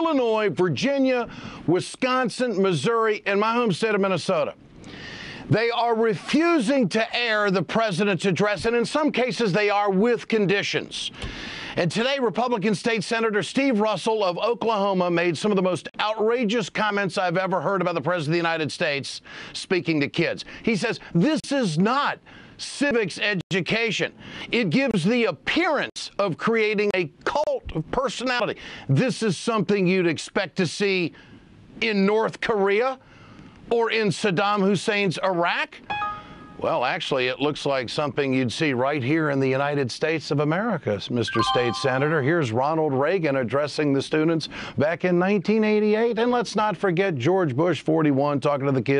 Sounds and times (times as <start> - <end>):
Male speech, man speaking: 0.0 - 4.6, 5.5 - 11.2, 11.8 - 31.2, 31.8 - 33.0, 33.7 - 35.8, 36.6 - 48.9.